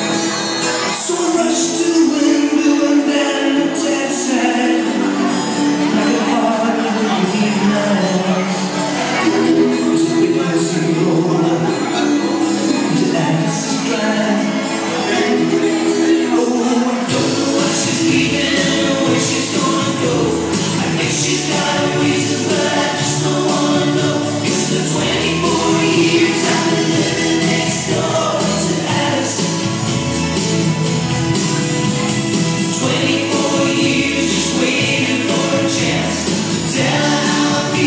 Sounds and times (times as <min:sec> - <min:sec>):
Music: 0:00.0 - 0:37.8.